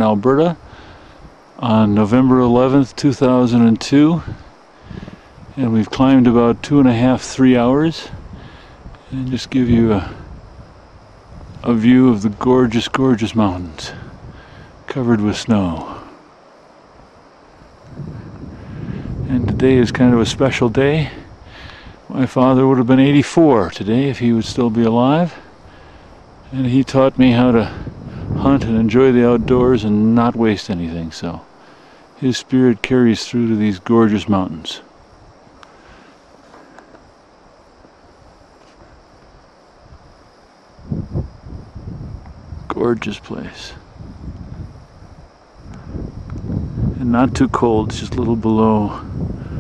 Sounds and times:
Speech: 0.0 - 0.6, 1.6 - 4.4, 5.6 - 8.2, 9.1 - 10.3, 11.6 - 14.1, 14.9 - 16.1, 19.2 - 21.3, 22.1 - 25.4, 26.5 - 31.5, 32.2 - 34.9, 42.7 - 43.9, 47.0 - 49.2.

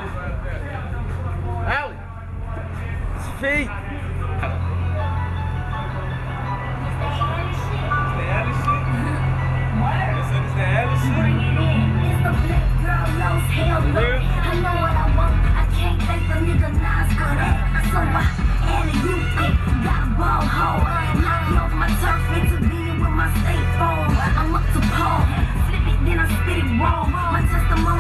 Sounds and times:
Musical instrument: 4.4 - 16.2.

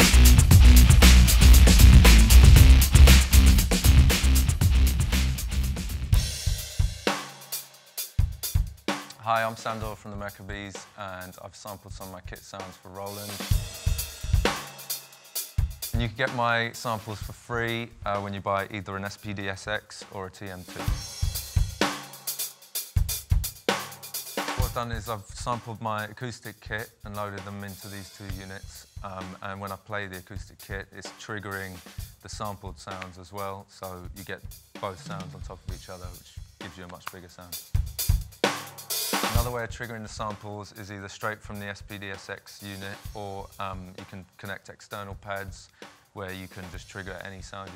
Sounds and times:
Music: 0.0 - 47.7
Speech: 9.1 - 13.6, 16.0 - 21.1, 24.6 - 37.6, 39.3 - 47.7.

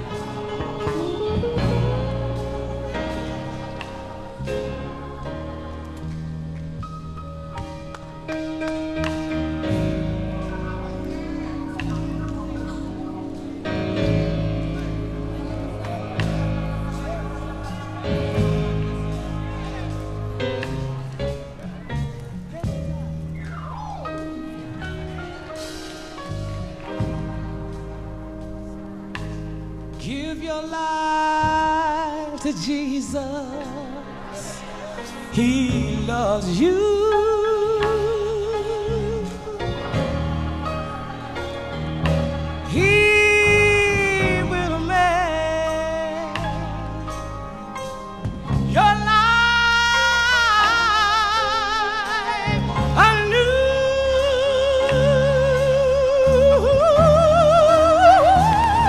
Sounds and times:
New-age music: 0.0 - 58.8.

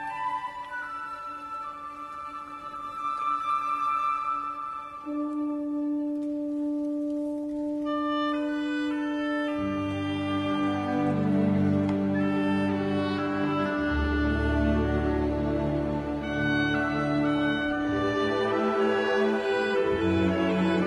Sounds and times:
Orchestra: 0.0 - 20.8
Violin, fiddle: 7.9 - 20.8.

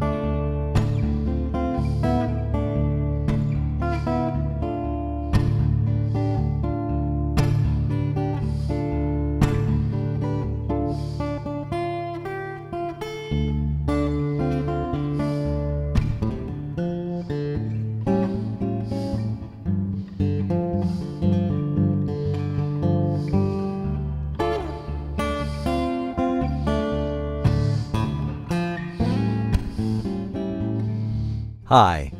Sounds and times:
Strum: 0.0 - 31.4
Acoustic guitar: 0.0 - 32.1.

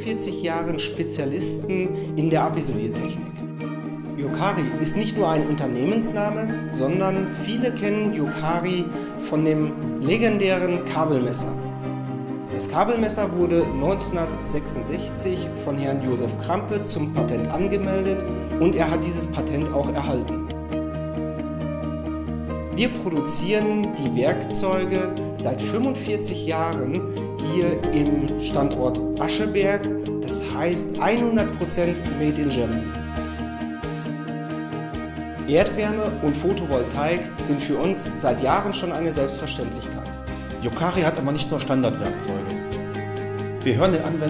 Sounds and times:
Speech: 0.0 - 3.2, 4.2 - 11.6, 12.5 - 20.4, 22.8 - 32.9, 35.5 - 42.6, 43.6 - 44.2
Music: 0.0 - 44.2.

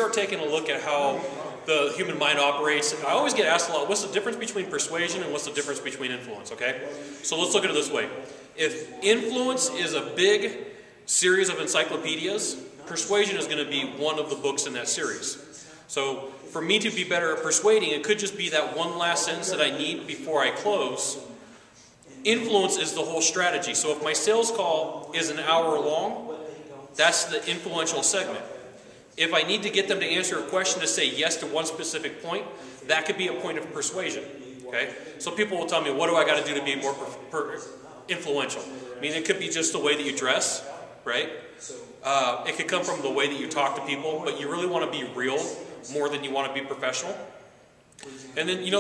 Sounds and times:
Speech: 0.0 - 48.8.

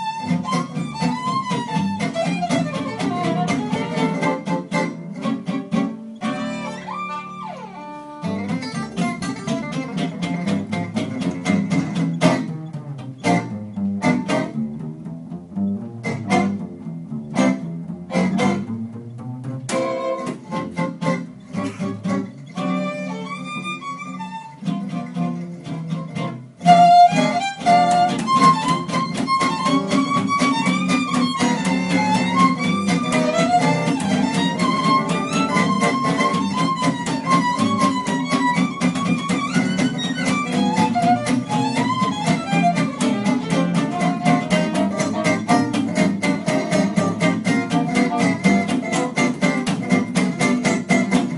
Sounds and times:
Violin, fiddle: 0.0 - 9.1, 19.7 - 49.4
Guitar: 0.0 - 51.3
Swing music: 0.0 - 51.3.

